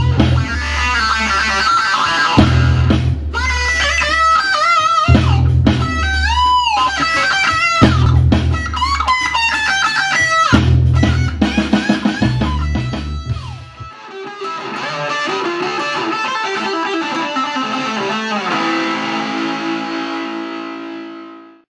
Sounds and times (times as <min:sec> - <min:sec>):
Strum: 0:00.0 - 0:21.3.